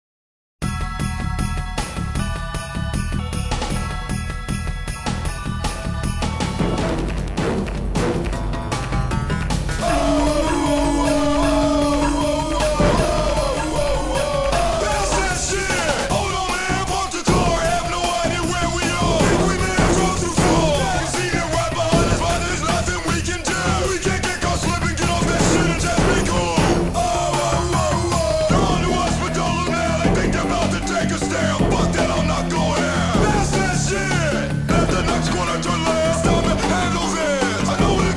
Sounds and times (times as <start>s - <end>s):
Video game music: 5.7s - 16.1s.